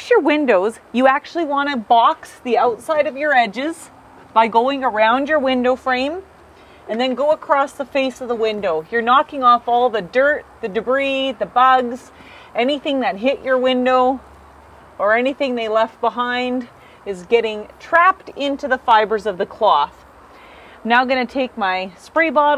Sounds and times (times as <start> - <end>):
Speech: 0.0 - 6.2, 6.9 - 14.2, 15.0 - 20.0, 20.8 - 22.5.